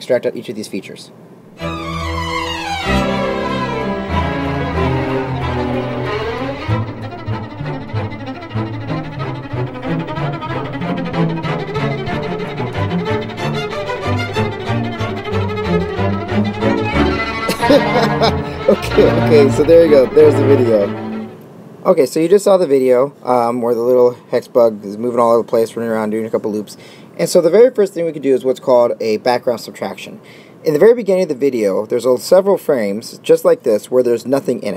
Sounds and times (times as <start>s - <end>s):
Cello: 1.6s - 21.4s.